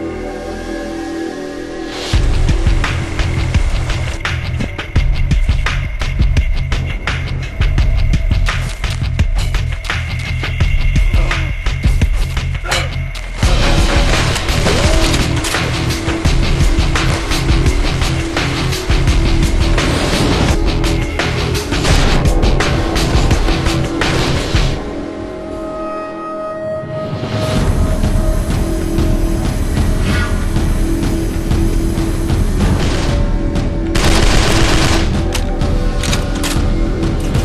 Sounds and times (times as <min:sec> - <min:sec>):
Music: 0:00.0 - 0:37.4.